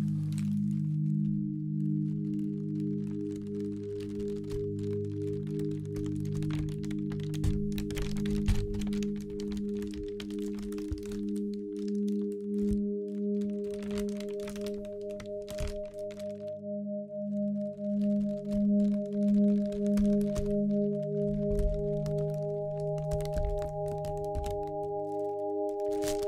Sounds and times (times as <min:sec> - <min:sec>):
Ambient music: 0:00.0 - 0:26.2.